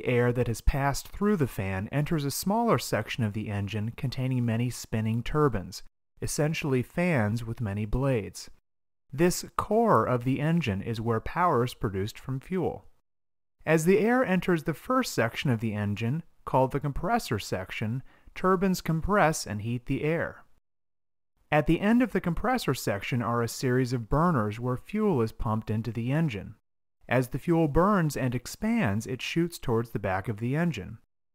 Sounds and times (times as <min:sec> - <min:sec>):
Narration, monologue: 0:00.0 - 0:31.1.